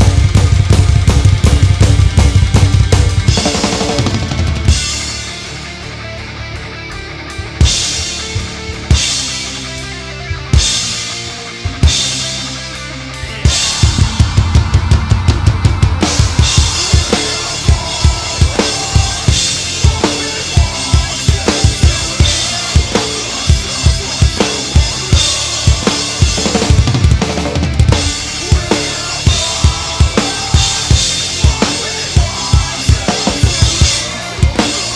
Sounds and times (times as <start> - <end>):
Music: 0.0 - 34.9.